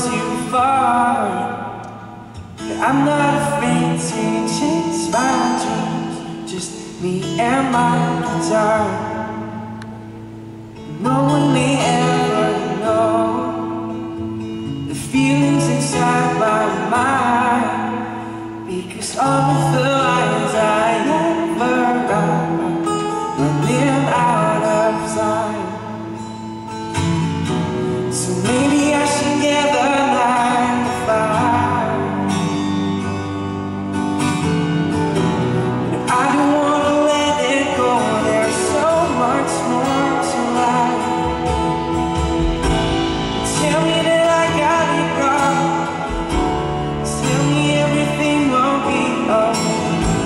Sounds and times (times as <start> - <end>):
Acoustic guitar: 0.0 - 50.2
Strum: 0.0 - 50.2.